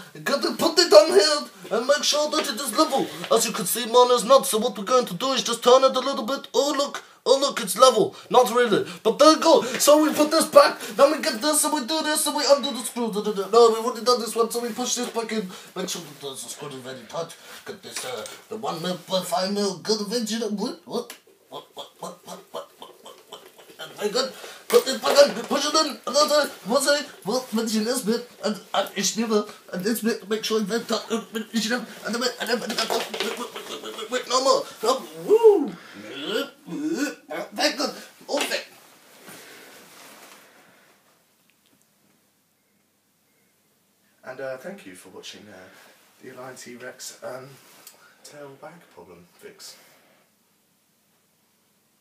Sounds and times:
Speech: 0:00.0 - 0:22.7, 0:23.8 - 0:38.8, 0:44.2 - 0:47.6, 0:48.2 - 0:49.9.

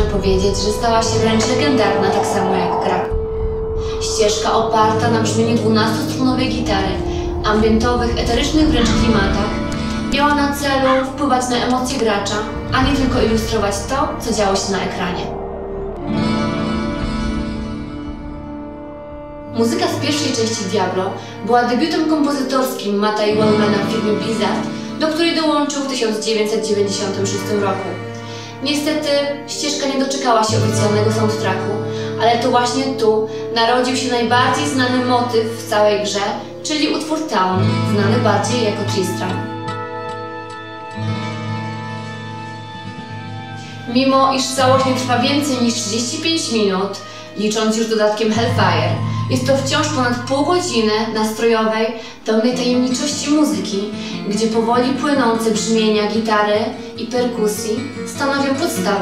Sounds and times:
Speech: 0:00.0 - 0:03.2, 0:03.8 - 0:15.4, 0:19.6 - 0:39.5, 0:43.9 - 0:59.0
Music: 0:00.0 - 0:59.0.

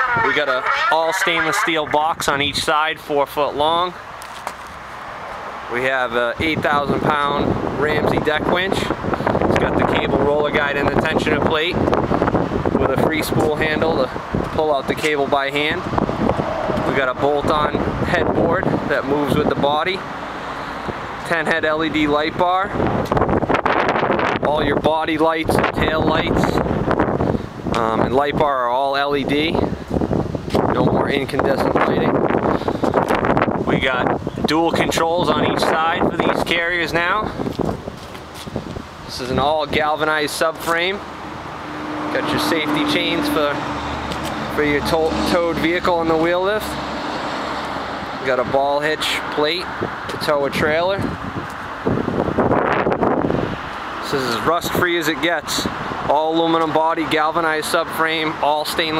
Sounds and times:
Speech: 0:00.0 - 0:04.0, 0:05.7 - 0:11.8, 0:12.8 - 0:15.9, 0:16.9 - 0:20.1, 0:21.2 - 0:22.8, 0:24.4 - 0:26.6, 0:27.8 - 0:29.7, 0:30.7 - 0:32.2, 0:33.7 - 0:37.4, 0:39.1 - 0:41.0, 0:42.2 - 0:43.6, 0:44.5 - 0:46.8, 0:48.2 - 0:51.1, 0:54.0 - 0:59.0.

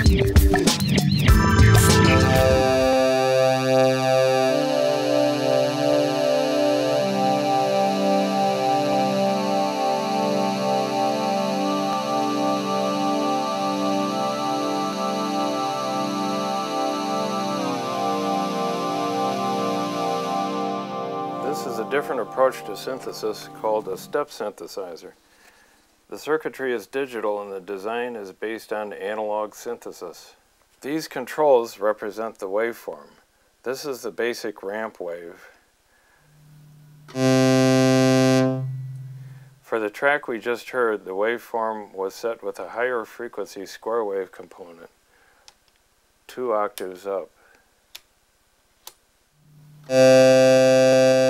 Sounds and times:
Speech: 0:21.4 - 0:25.2, 0:26.1 - 0:35.6, 0:39.7 - 0:44.9, 0:46.3 - 0:47.4.

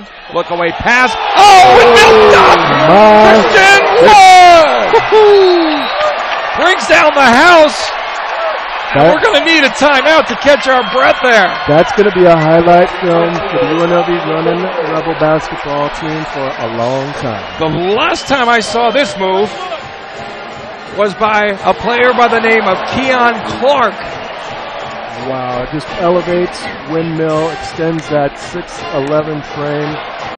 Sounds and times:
Speech: 0:09.0 - 0:19.7, 0:21.0 - 0:24.0, 0:25.2 - 0:30.0
Music: 0:15.4 - 0:28.1, 0:28.7 - 0:30.3.

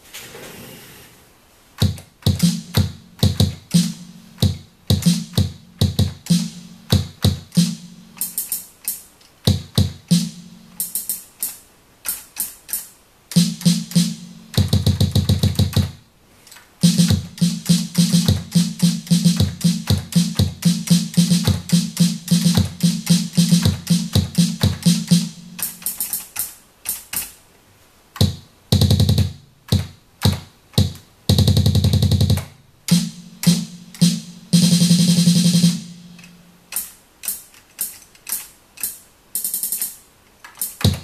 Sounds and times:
Sampler: 0:01.8 - 0:08.6, 0:13.3 - 0:15.9, 0:16.8 - 0:26.4, 0:31.3 - 0:36.5.

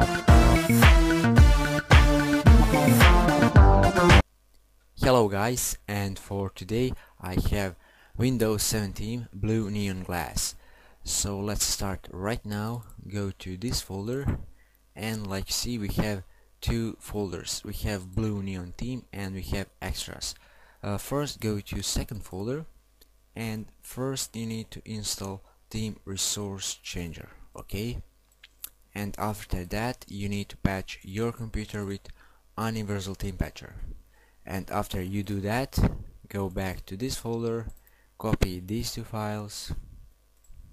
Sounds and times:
Speech: 0:05.0 - 0:14.4, 0:15.0 - 0:22.7, 0:23.4 - 0:28.1, 0:28.9 - 0:33.9, 0:34.5 - 0:39.9.

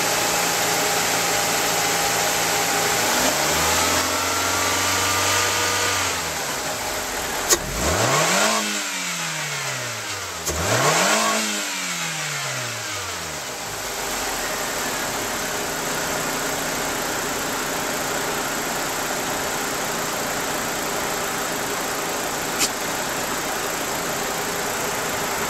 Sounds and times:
Car: 0:00.0 - 0:25.4
Accelerating, revving, vroom: 0:03.0 - 0:06.3, 0:07.5 - 0:13.3.

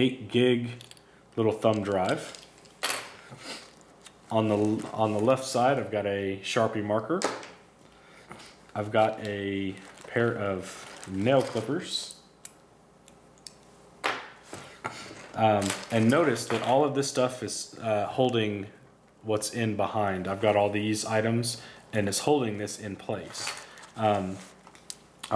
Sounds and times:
Speech: 0:00.0 - 0:00.8, 0:01.4 - 0:02.4, 0:04.3 - 0:07.3, 0:08.8 - 0:12.2, 0:15.4 - 0:24.6.

